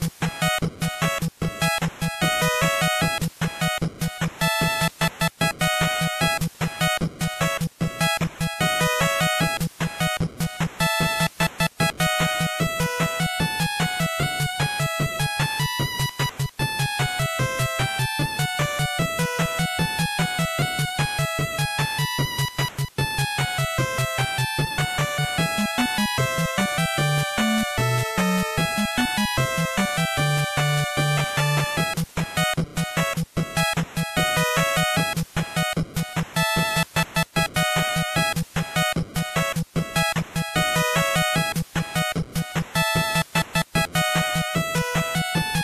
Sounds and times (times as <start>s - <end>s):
Video game music: 0.0s - 45.6s.